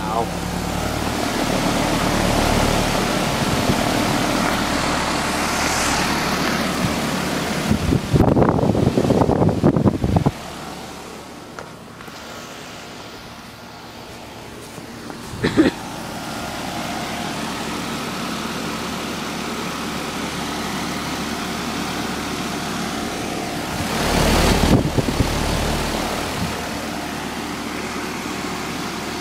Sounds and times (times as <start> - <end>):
Mechanical fan: 0.0 - 29.2.